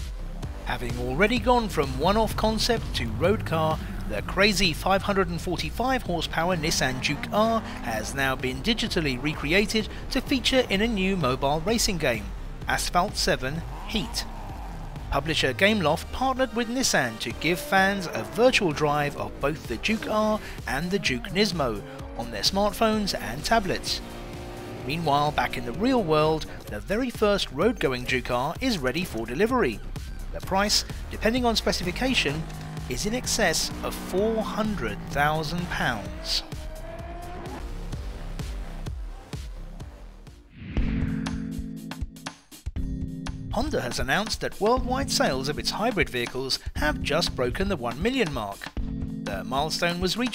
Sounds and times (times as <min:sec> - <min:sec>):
Music: 0:00.0 - 0:50.3
Vehicle: 0:00.2 - 0:38.9
Speech: 0:00.7 - 0:14.3, 0:15.1 - 0:24.0, 0:24.8 - 0:36.5, 0:43.5 - 0:50.3.